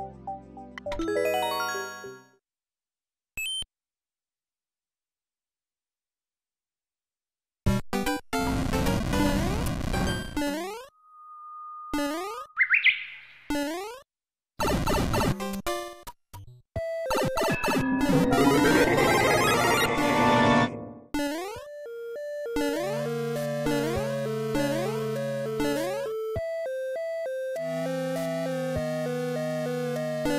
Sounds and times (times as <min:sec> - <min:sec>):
Chirp, tweet: 0:12.6 - 0:13.4.